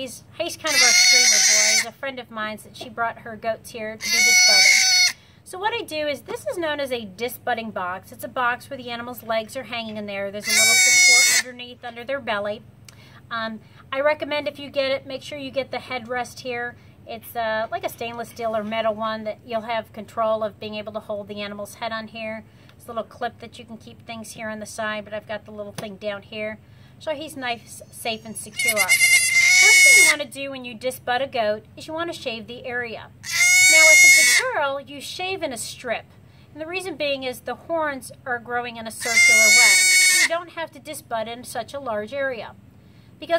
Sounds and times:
Speech: 0.0s - 4.8s, 5.5s - 12.6s, 13.3s - 29.0s, 29.6s - 42.6s
Bleat: 0.6s - 1.9s, 4.0s - 5.2s, 10.4s - 11.6s, 28.2s - 30.2s, 33.2s - 34.6s, 39.0s - 40.4s.

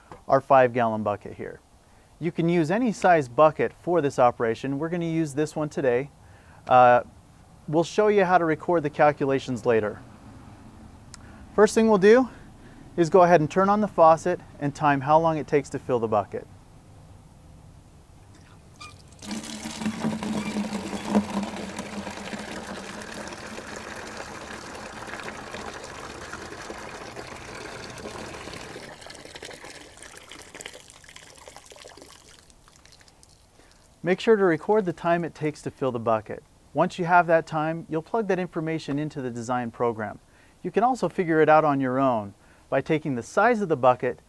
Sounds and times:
Speech: 0.3s - 1.6s, 2.2s - 6.1s, 6.7s - 7.1s, 7.7s - 10.0s, 11.6s - 12.4s, 13.0s - 16.5s, 34.0s - 44.2s
Water: 18.4s - 34.0s.

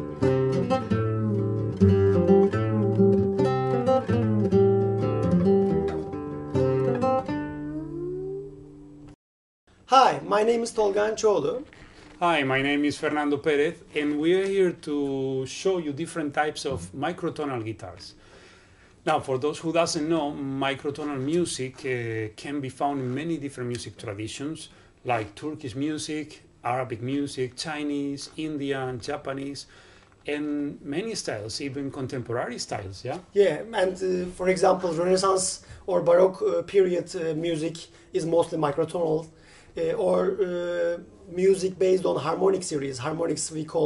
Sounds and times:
Guitar: 0.0s - 9.2s, 38.2s - 43.1s
Speech: 9.9s - 18.2s, 19.0s - 29.7s, 30.3s - 43.8s.

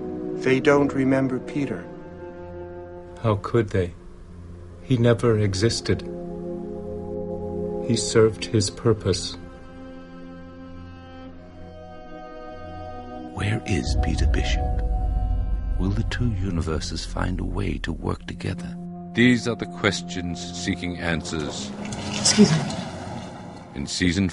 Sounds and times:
Music: 0.0s - 24.3s
Speech: 3.2s - 4.0s, 4.8s - 6.1s, 7.9s - 9.4s, 13.3s - 14.8s, 15.8s - 21.7s, 23.8s - 24.3s.

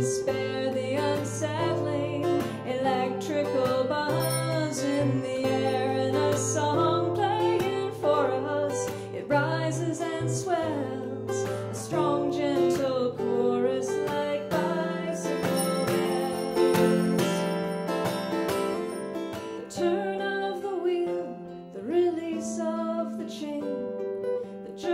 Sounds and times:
Bicycle bell: 4.0s - 6.7s, 15.2s - 19.6s.

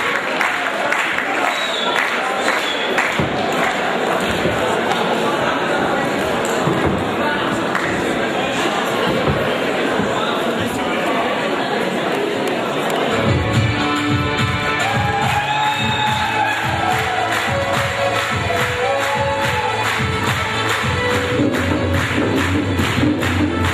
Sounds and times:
Speech: 0.0s - 13.3s
Dance music: 13.1s - 23.7s.

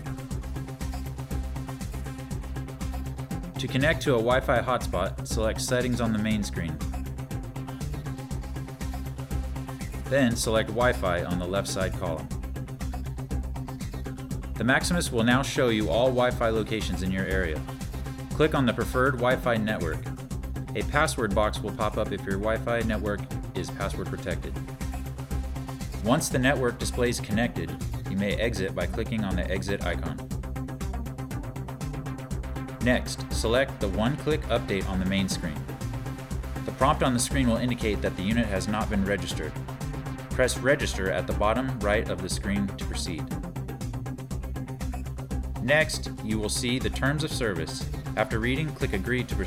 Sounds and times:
Music: 0.0s - 49.4s
Speech: 3.6s - 6.8s, 10.1s - 12.3s, 14.6s - 17.6s, 18.4s - 20.1s, 20.8s - 24.6s, 26.0s - 30.2s, 32.8s - 35.6s, 36.7s - 39.5s, 40.4s - 43.3s, 45.6s - 49.4s.

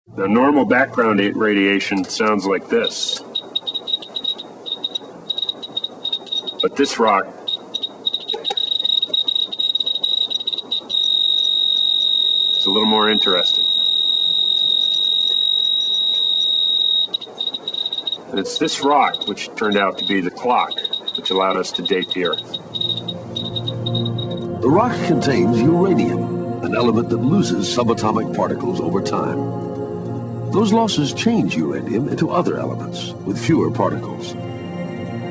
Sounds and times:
Speech: 0.2s - 3.2s, 6.6s - 7.3s, 12.6s - 13.6s, 18.3s - 22.4s, 24.6s - 29.4s, 30.6s - 34.4s.

